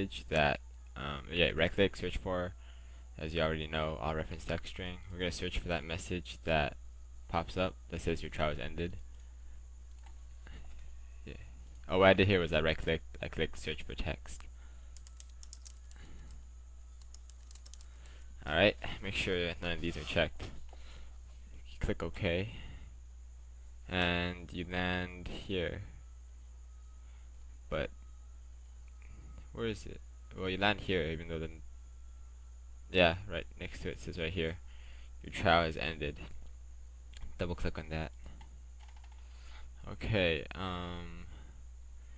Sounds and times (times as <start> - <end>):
Speech: 0.0 - 2.6, 3.2 - 9.0, 11.3 - 14.5, 18.4 - 20.6, 21.6 - 22.7, 23.9 - 26.0, 27.7 - 27.9, 29.6 - 31.6, 32.9 - 34.6, 35.2 - 36.4, 37.2 - 38.2, 39.8 - 41.4
Computer keyboard: 15.0 - 16.0, 17.0 - 18.2, 38.4 - 39.2.